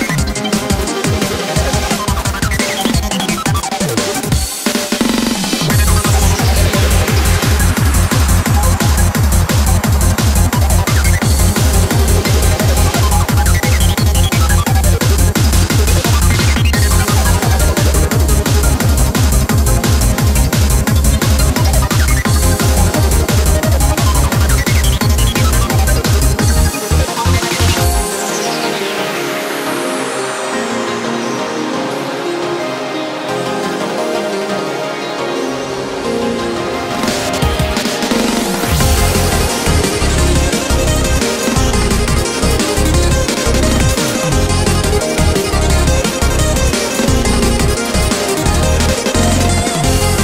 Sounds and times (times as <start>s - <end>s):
Techno: 0.0s - 50.2s.